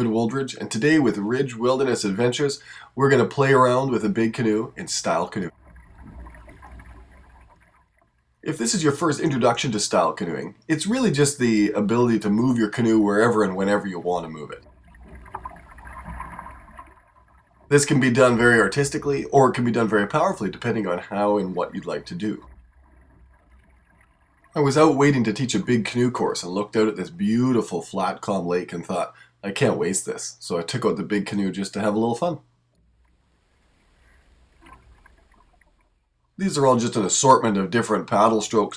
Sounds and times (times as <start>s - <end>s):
Speech: 0.0s - 5.5s, 8.5s - 14.6s, 17.7s - 22.5s, 24.6s - 32.4s, 36.4s - 38.7s.